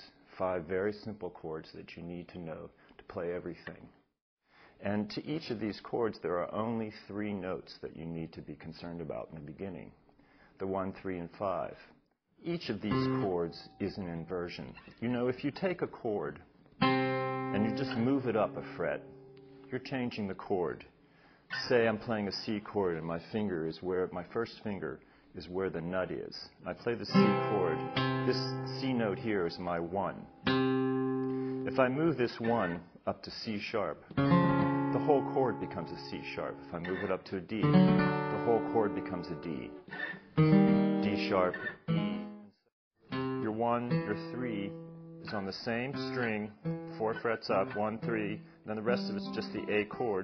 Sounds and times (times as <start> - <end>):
Speech: 0.0 - 4.0, 4.8 - 10.0, 10.6 - 16.5, 17.6 - 19.1, 19.7 - 30.3, 31.7 - 34.2, 34.9 - 39.8, 41.0 - 41.7, 43.4 - 50.2.